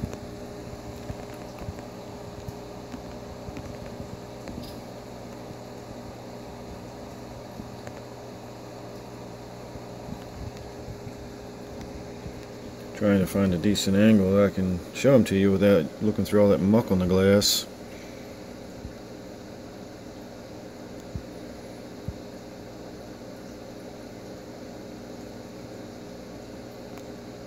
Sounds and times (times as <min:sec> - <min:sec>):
Mechanical fan: 0:00.0 - 0:27.4.